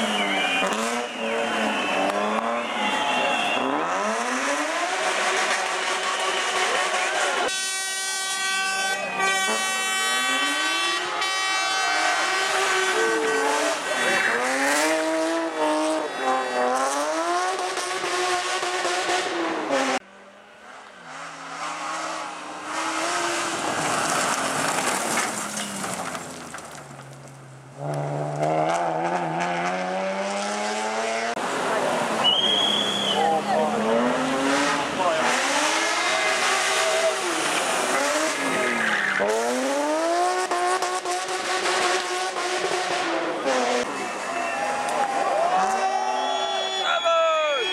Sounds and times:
Race car, auto racing: 0.0s - 47.7s
Skidding: 0.0s - 47.7s.

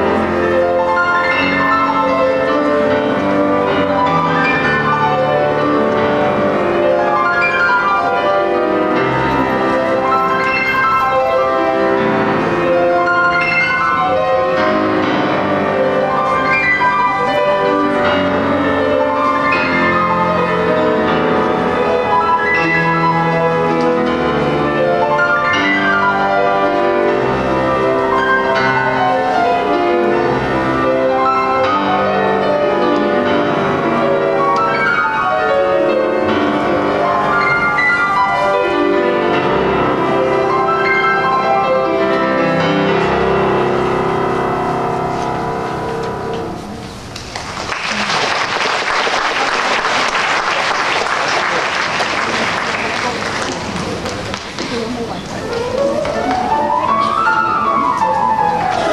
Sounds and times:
Piano: 0.0s - 58.9s
Applause: 47.1s - 55.0s.

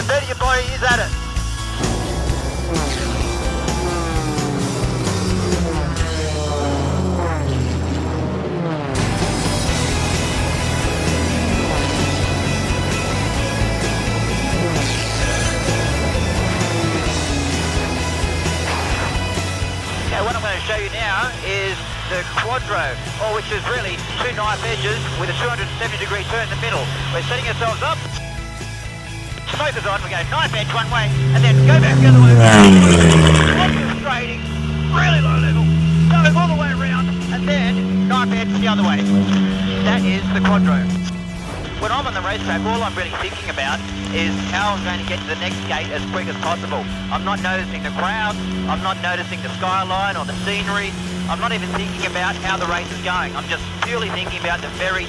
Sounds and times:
Speech: 0.0s - 1.2s, 20.1s - 28.2s, 29.4s - 32.8s, 33.4s - 41.1s, 41.8s - 55.0s
Music: 0.0s - 55.0s
Vehicle: 0.0s - 55.0s
Accelerating, revving, vroom: 1.8s - 20.1s, 30.4s - 41.6s, 43.6s - 54.2s.

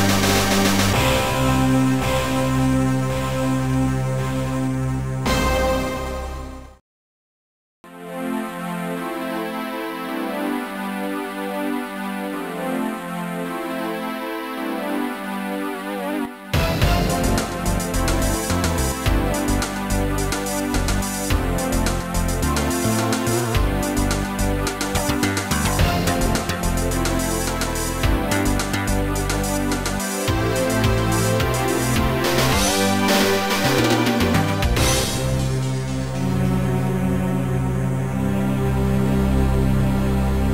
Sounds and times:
Music: 0.0s - 6.8s, 7.9s - 40.5s.

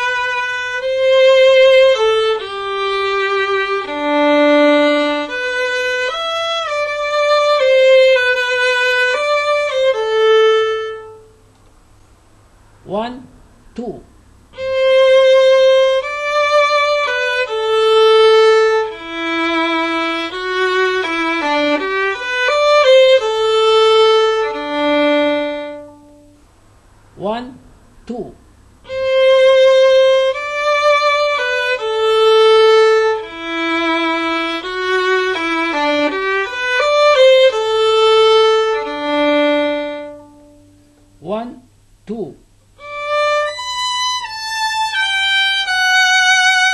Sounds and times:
Violin, fiddle: 0.0s - 11.4s, 14.6s - 26.4s, 28.8s - 40.9s, 42.8s - 46.7s
Speech: 12.8s - 14.1s, 27.2s - 28.4s, 41.2s - 42.5s.

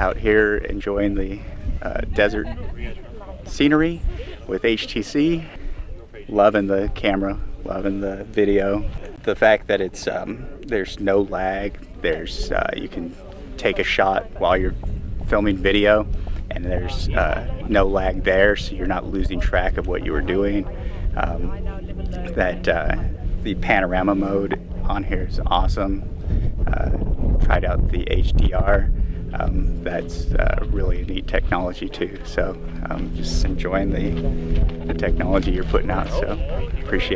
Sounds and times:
Speech: 0.0s - 26.0s, 26.7s - 34.2s, 34.8s - 37.1s.

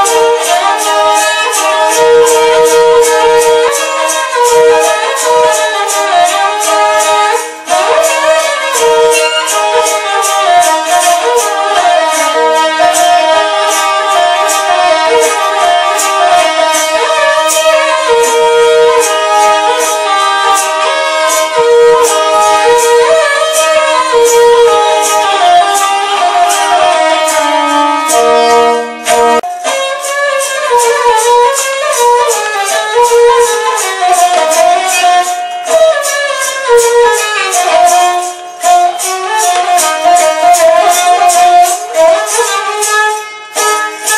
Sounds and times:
Traditional music: 0.0s - 44.1s.

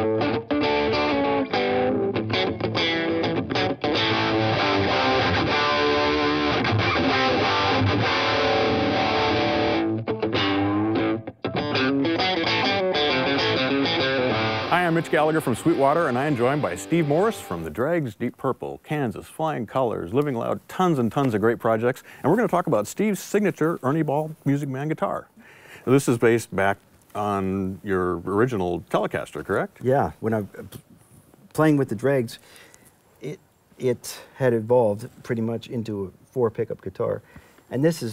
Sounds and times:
Speech: 14.7s - 25.3s, 25.9s - 30.8s, 31.5s - 32.4s, 33.2s - 38.1s.

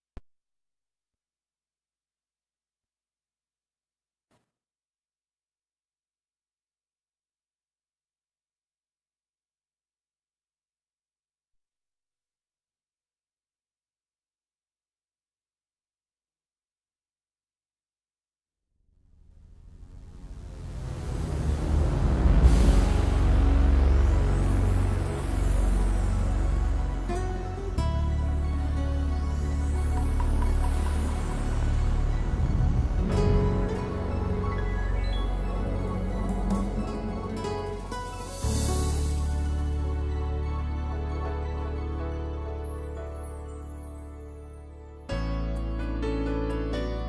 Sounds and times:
Sound effect: 18.7s - 41.6s
Music: 19.2s - 47.0s.

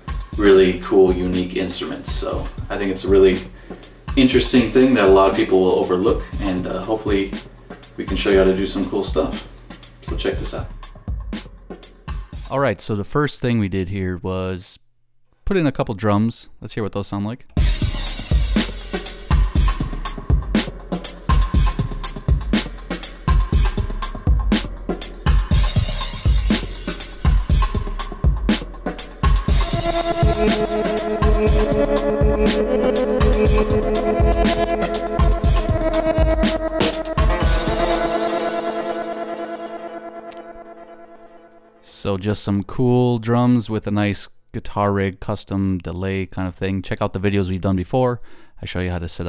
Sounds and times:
Music: 0.0s - 12.9s, 17.5s - 42.0s
Speech: 0.4s - 3.5s, 4.2s - 7.4s, 8.0s - 10.7s, 12.4s - 14.8s, 15.4s - 17.5s, 41.8s - 49.2s.

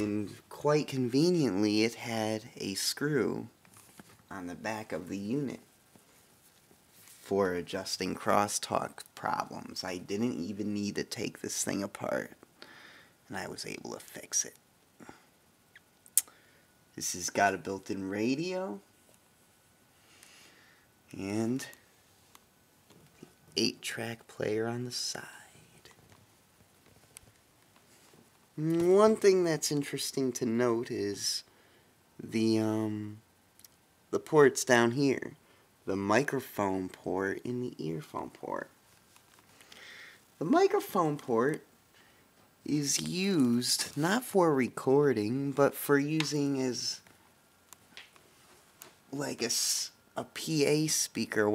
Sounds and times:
Whispering: 25.1s - 26.0s.

